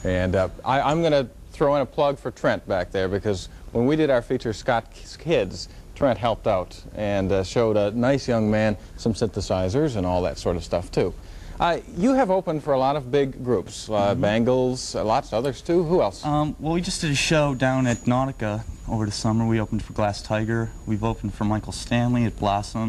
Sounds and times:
Speech: 0.0 - 22.8.

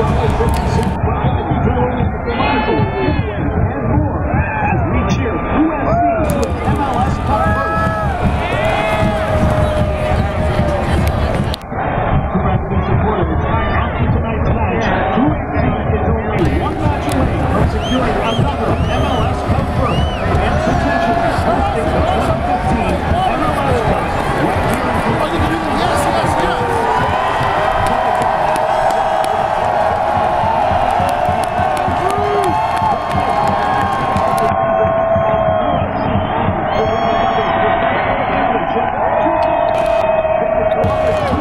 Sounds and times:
Speech: 0.0 - 11.6, 12.2 - 30.0, 36.7 - 41.4.

